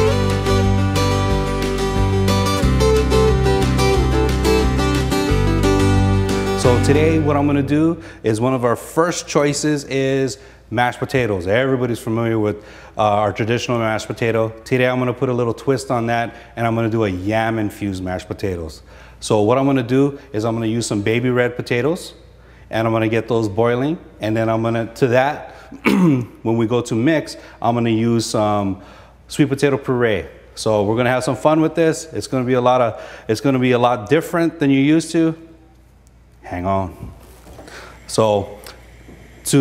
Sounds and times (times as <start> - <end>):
Speech: 6.6 - 25.5, 26.2 - 35.5, 36.4 - 37.2, 38.1 - 38.6.